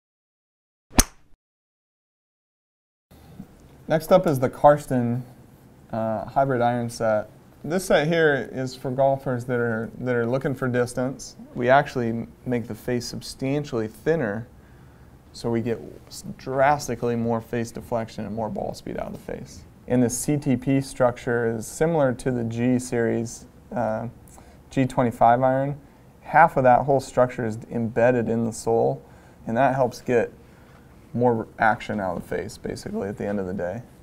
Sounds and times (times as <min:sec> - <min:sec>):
Speech: 0:03.9 - 0:14.6, 0:15.3 - 0:30.4, 0:31.1 - 0:34.0.